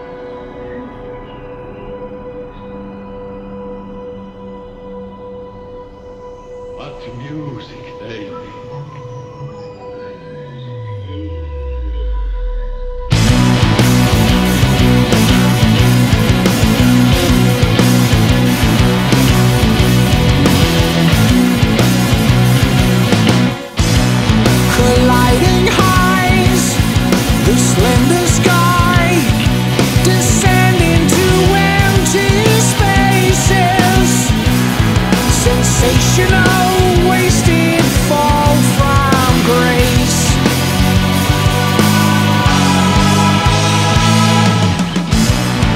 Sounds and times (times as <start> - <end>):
Heavy metal: 0.0 - 8.5, 10.1 - 45.7
Speech: 6.8 - 10.1.